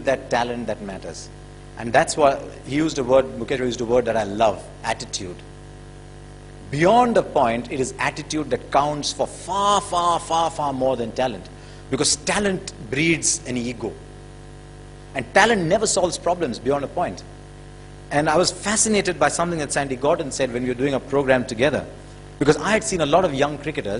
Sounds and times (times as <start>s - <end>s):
Male speech, man speaking: 0.0s - 5.4s, 6.7s - 14.0s, 15.2s - 17.3s, 18.1s - 23.9s.